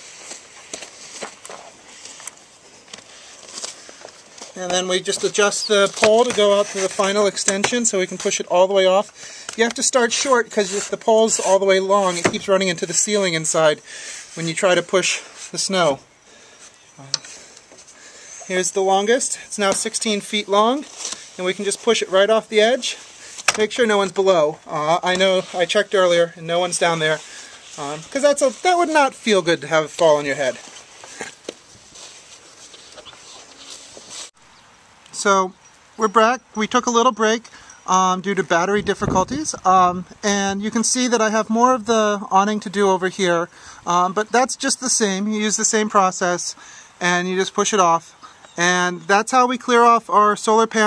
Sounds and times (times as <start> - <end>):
Outside, rural or natural: 0.0 - 50.8
Speech: 4.6 - 16.1, 17.0 - 17.3, 18.5 - 30.6, 35.1 - 50.8.